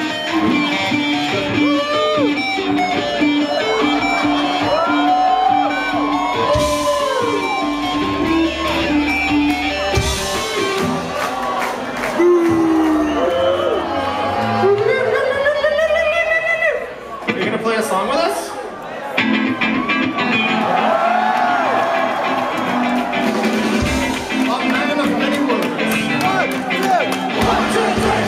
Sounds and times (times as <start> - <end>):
Music: 0.0 - 16.9, 19.1 - 28.2
Speech: 17.3 - 18.7, 24.4 - 26.5.